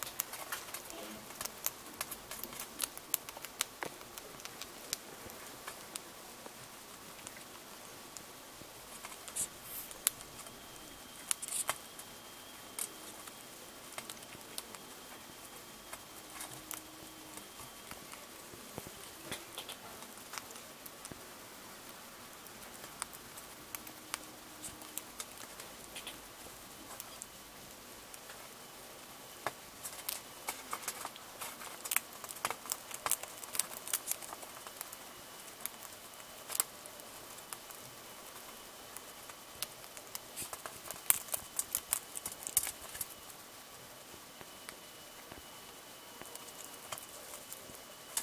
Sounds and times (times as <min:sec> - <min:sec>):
Patter: 0:00.0 - 0:48.2.